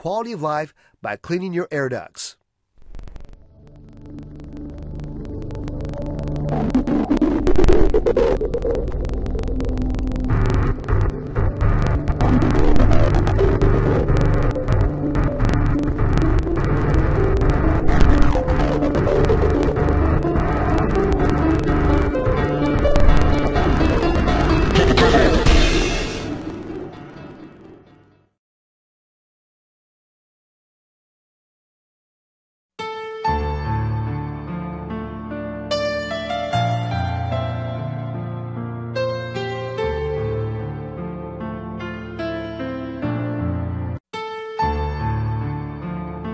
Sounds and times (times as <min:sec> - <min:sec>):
Hum: 0:02.8 - 0:28.0.